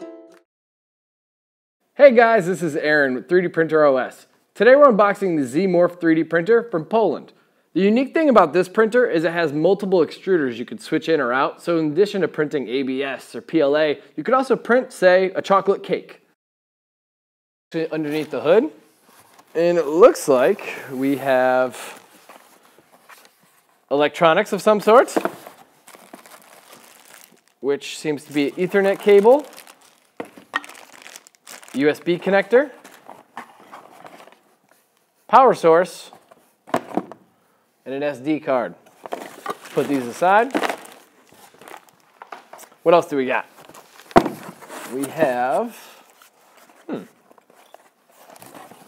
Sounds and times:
Speech: 2.0 - 16.3, 17.8 - 18.8, 19.6 - 22.0, 23.9 - 25.3, 27.6 - 29.5, 31.7 - 32.8, 35.3 - 36.2, 37.8 - 38.8, 39.8 - 40.6, 42.8 - 43.5, 44.9 - 46.0, 46.9 - 47.1.

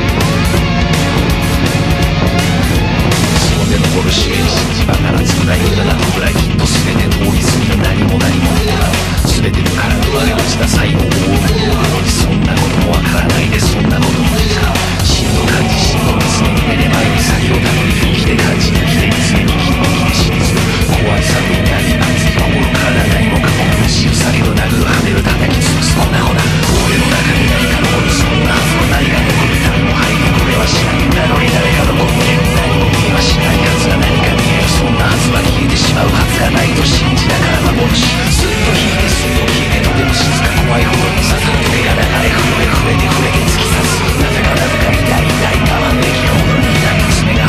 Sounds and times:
Angry music: 0.0 - 47.4.

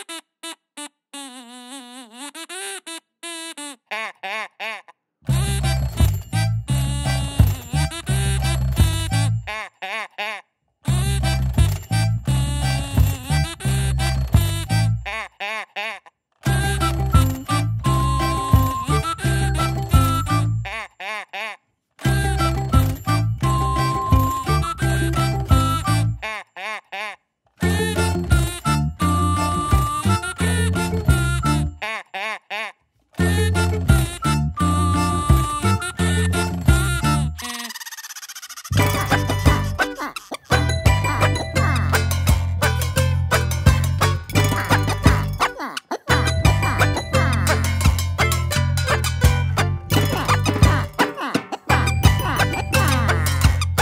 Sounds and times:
Funny music: 0.0 - 53.8.

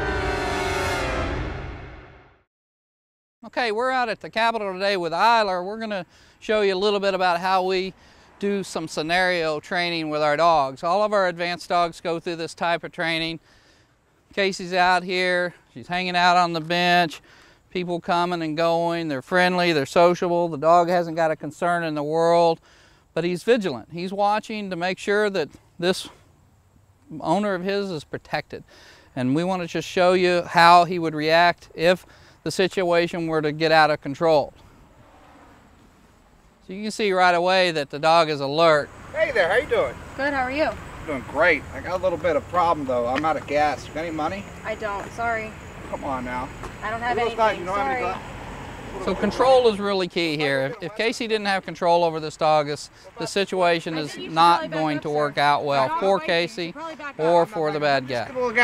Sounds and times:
Speech: 3.4 - 13.4, 29.2 - 34.5, 36.7 - 40.5, 49.0 - 58.6.

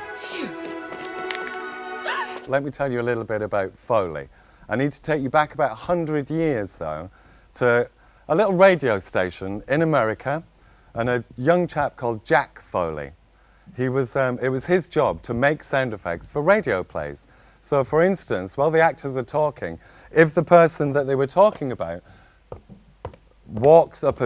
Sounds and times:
Speech: 2.5 - 22.1, 23.5 - 24.2.

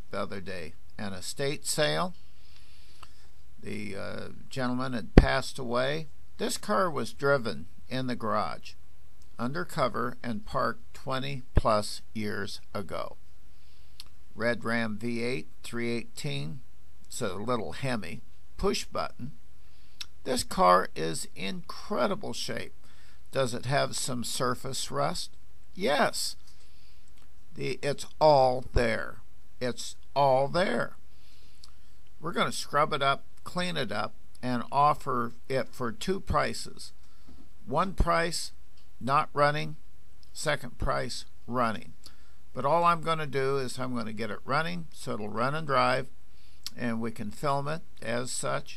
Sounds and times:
Speech: 0.0 - 2.2, 3.6 - 8.8, 9.4 - 13.2, 14.4 - 19.4, 20.0 - 26.4, 27.6 - 31.0, 32.2 - 37.0, 37.7 - 48.7.

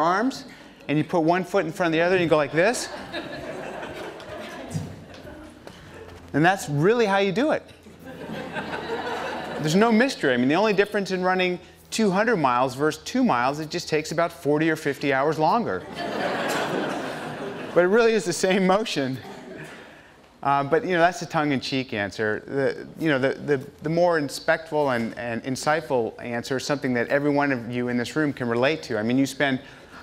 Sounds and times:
Speech: 0.0 - 2.9, 6.3 - 7.7, 9.6 - 15.8, 17.8 - 19.3, 20.4 - 29.6
Inside, large room or hall: 0.0 - 30.0.

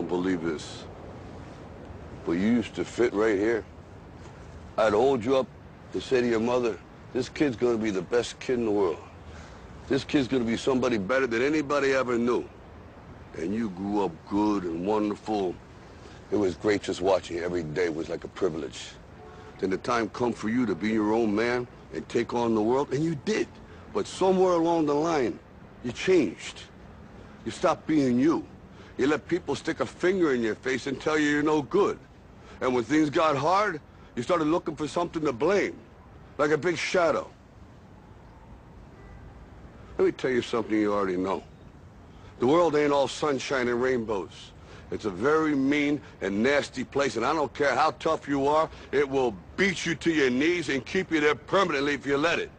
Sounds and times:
Speech: 0.0 - 0.9, 2.2 - 3.7, 4.8 - 9.1, 9.9 - 12.5, 13.3 - 15.6, 16.3 - 19.0, 19.6 - 26.7, 27.4 - 32.0, 32.6 - 37.4, 40.0 - 41.5, 42.4 - 52.5.

